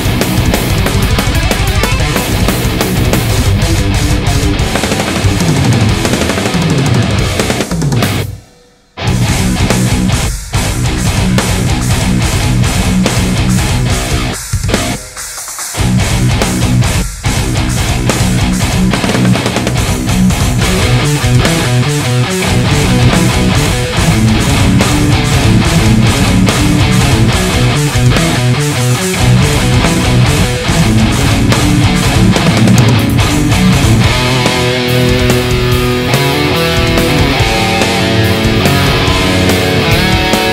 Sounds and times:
Electric guitar: 0.0s - 40.5s.

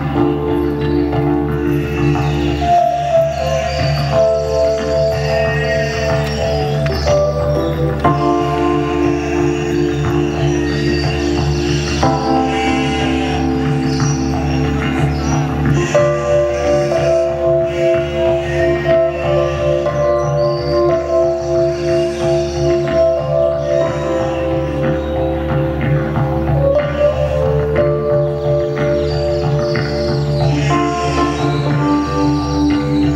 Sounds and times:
Music: 0.0s - 33.1s
Bleat: 3.5s - 7.5s, 8.2s - 13.7s, 15.7s - 23.0s, 30.5s - 32.5s.

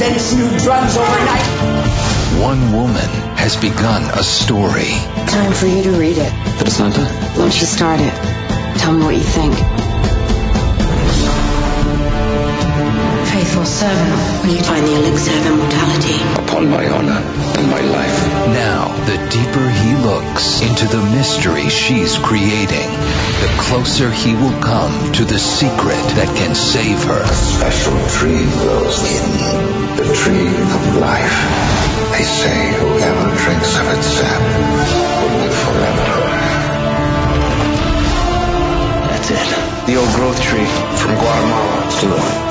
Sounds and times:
Music: 0.0s - 42.5s.

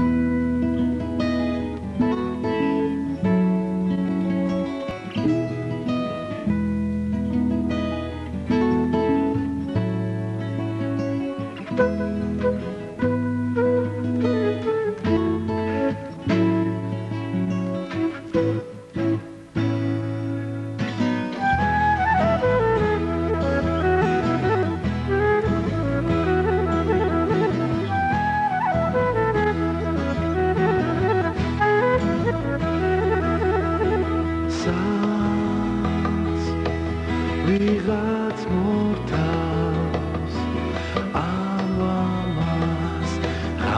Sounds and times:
Music: 0.0s - 43.7s.

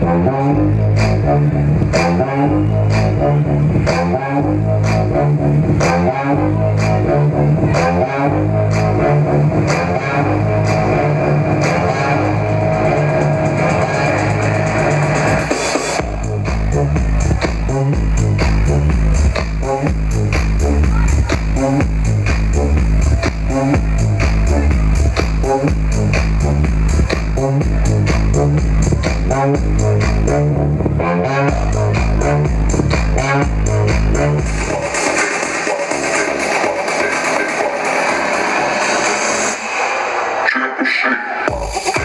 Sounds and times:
Electronic music: 0.0s - 42.0s.

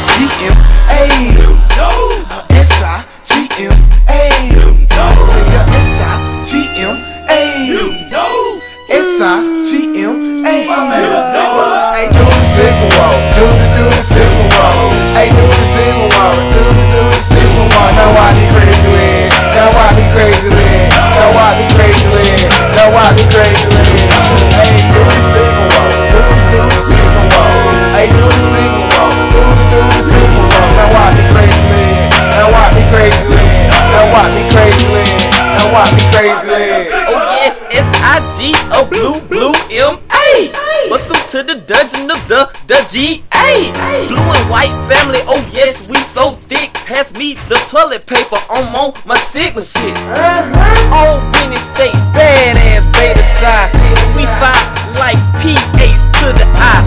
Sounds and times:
Music: 0.0s - 56.8s.

